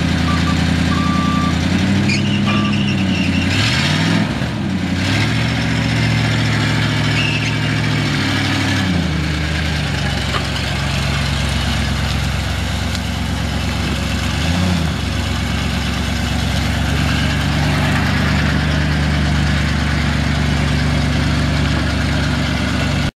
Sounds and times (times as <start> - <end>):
Truck: 0.0 - 23.1.